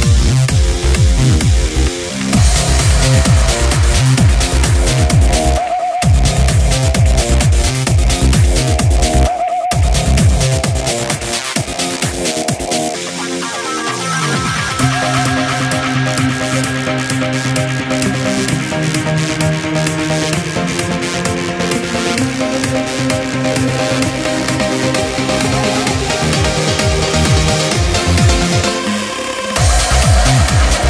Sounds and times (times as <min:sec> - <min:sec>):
Music: 0:00.0 - 0:30.9.